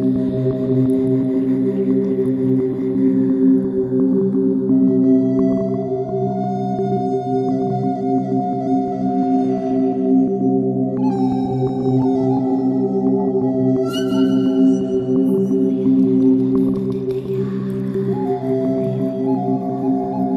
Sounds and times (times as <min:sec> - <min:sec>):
New-age music: 0:00.0 - 0:20.3.